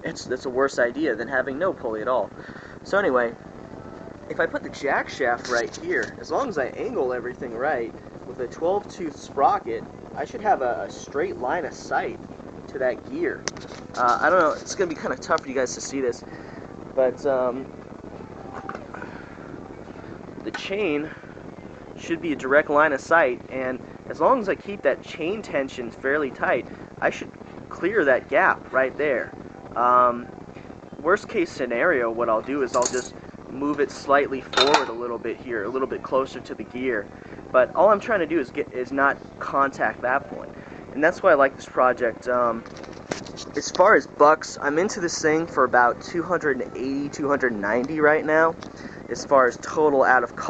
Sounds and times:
Speech: 0:00.0 - 0:03.4, 0:04.3 - 0:13.4, 0:14.0 - 0:16.2, 0:17.0 - 0:17.7, 0:20.4 - 0:21.2, 0:22.0 - 0:30.3, 0:31.0 - 0:42.6, 0:43.5 - 0:50.5.

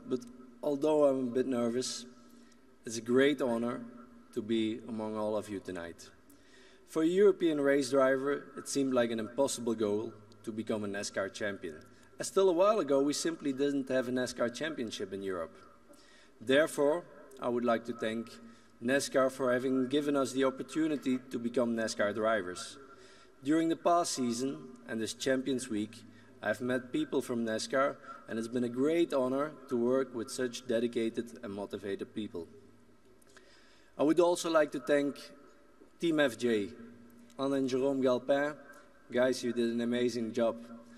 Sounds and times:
Male speech, man speaking: 0:00.0 - 0:02.1, 0:02.9 - 0:06.2, 0:06.9 - 0:15.6, 0:16.4 - 0:22.8, 0:23.4 - 0:32.6, 0:34.0 - 0:35.4, 0:36.0 - 0:36.8, 0:37.4 - 0:40.7.

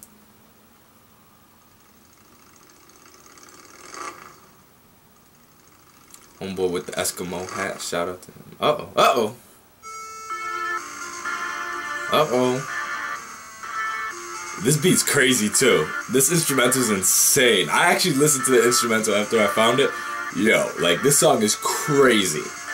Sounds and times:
Inside, small room: 0:00.0 - 0:22.7
Speech: 0:06.4 - 0:09.4, 0:12.1 - 0:12.6, 0:14.6 - 0:22.5
Music: 0:09.8 - 0:22.7.

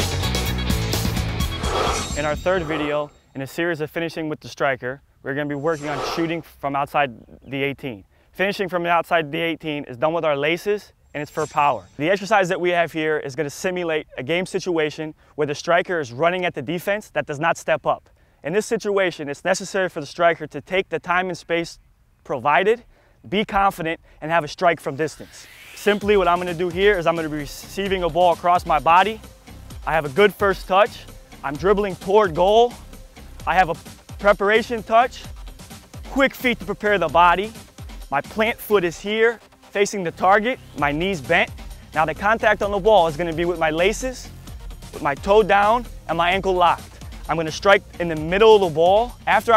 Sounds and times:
Speech: 0:02.2 - 0:29.2, 0:29.8 - 0:32.8, 0:33.4 - 0:35.3, 0:36.1 - 0:44.3, 0:44.9 - 0:49.5.

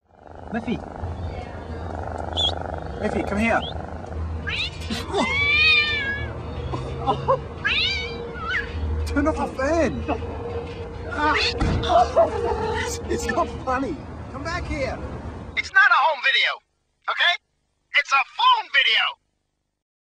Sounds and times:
Speech: 0:18.0 - 0:19.2.

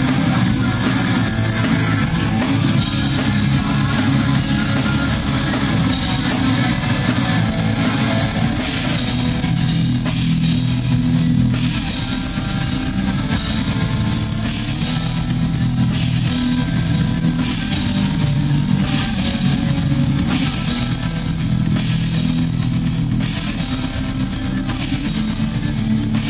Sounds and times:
Heavy metal: 0:00.0 - 0:26.2.

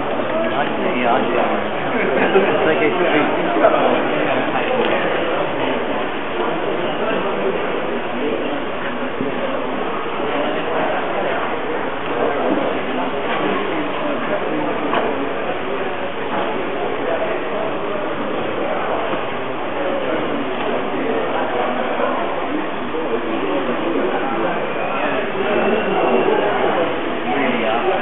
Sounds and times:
Speech: 0:00.0 - 0:28.0.

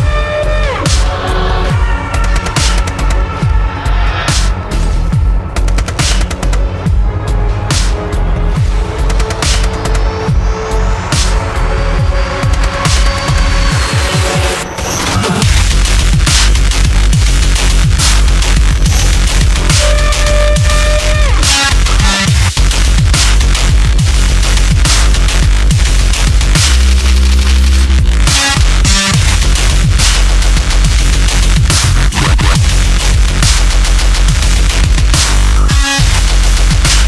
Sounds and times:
Dubstep: 0:00.0 - 0:37.0.

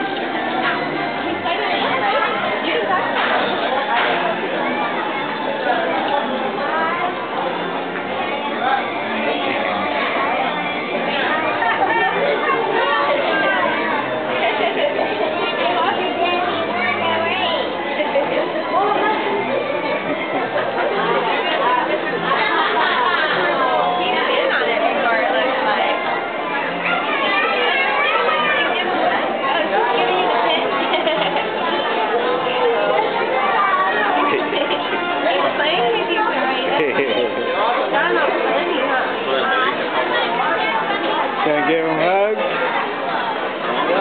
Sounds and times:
Music: 0:00.0 - 0:44.0
Speech: 0:00.0 - 0:44.0.

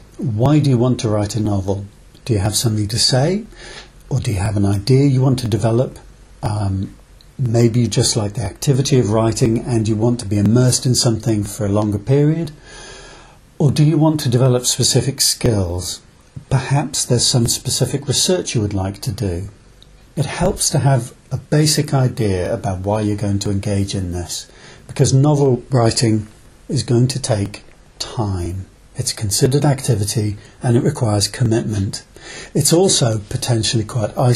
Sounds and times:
Speech: 0:00.2 - 0:03.5, 0:04.1 - 0:12.6, 0:13.6 - 0:19.6, 0:20.2 - 0:34.3.

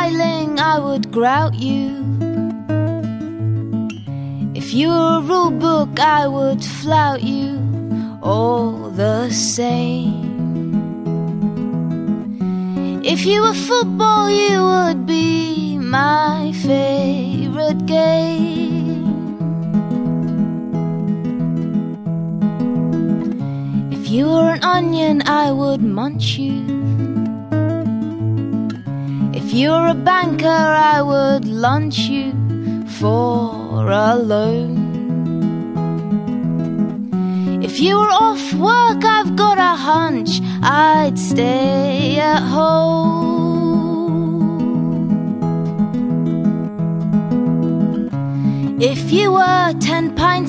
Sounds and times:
Music: 0:00.0 - 0:50.4.

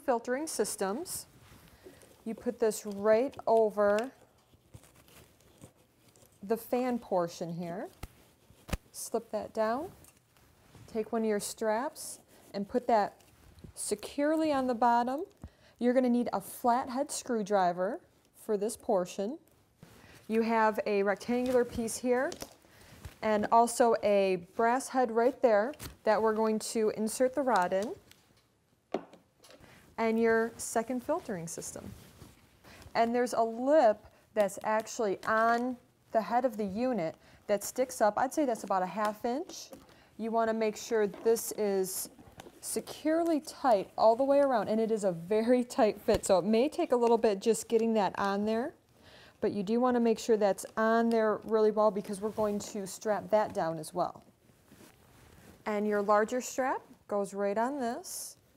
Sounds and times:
Speech: 0:00.0 - 0:01.3, 0:02.2 - 0:04.2, 0:06.4 - 0:08.0, 0:09.0 - 0:10.0, 0:10.9 - 0:13.2, 0:13.8 - 0:19.4, 0:20.3 - 0:22.4, 0:23.2 - 0:28.0, 0:30.0 - 0:31.9, 0:33.0 - 0:48.8, 0:49.4 - 0:54.3, 0:55.7 - 0:58.4.

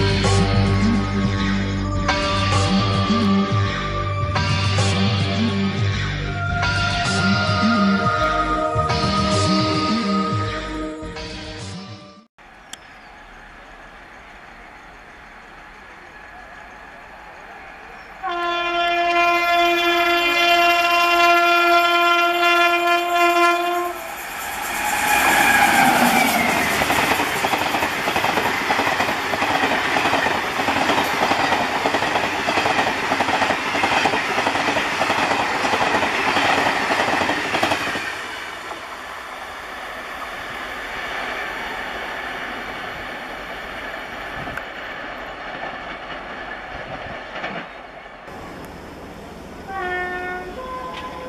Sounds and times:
Railroad car, train wagon: 0:00.0 - 0:11.3, 0:12.4 - 0:51.2
Train horn: 0:18.2 - 0:27.3, 0:49.7 - 0:51.2.

